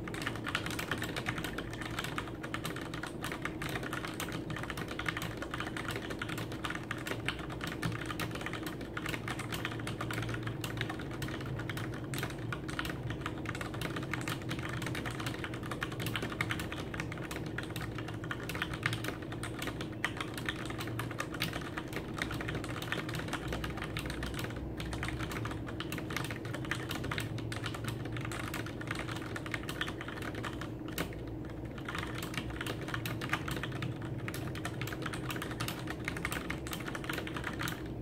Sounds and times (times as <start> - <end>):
Computer keyboard: 0.0 - 38.0.